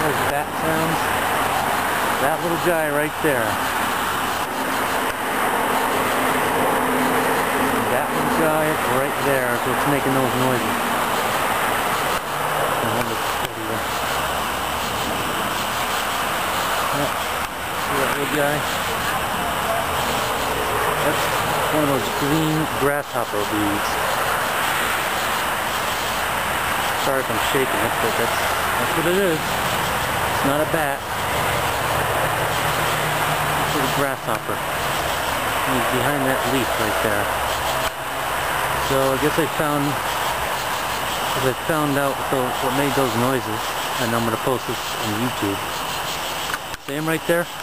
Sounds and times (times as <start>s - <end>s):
Speech: 0.0s - 1.0s, 2.2s - 3.6s, 7.8s - 10.8s, 12.8s - 13.9s, 16.9s - 17.2s, 17.9s - 19.9s, 21.0s - 24.0s, 27.0s - 29.5s, 30.4s - 31.0s, 33.7s - 34.6s, 35.7s - 37.3s, 38.8s - 40.0s, 41.4s - 45.6s, 46.8s - 47.5s.